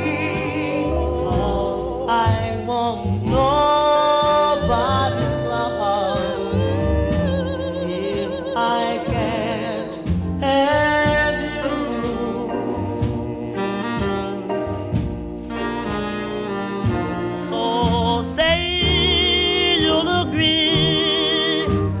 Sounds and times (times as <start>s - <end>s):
Singing: 0.0s - 14.3s, 17.5s - 22.0s
Music: 0.0s - 22.0s.